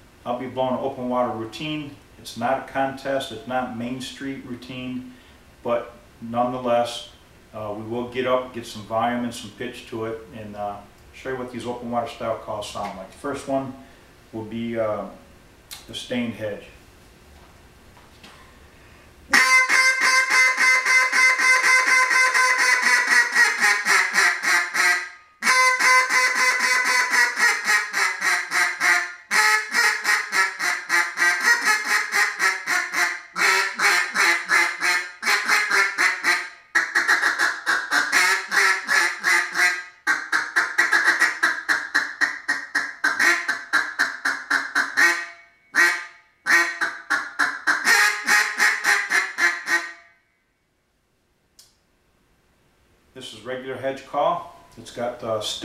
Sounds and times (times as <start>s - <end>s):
Speech: 0.2s - 15.2s, 15.8s - 16.8s, 53.2s - 55.6s.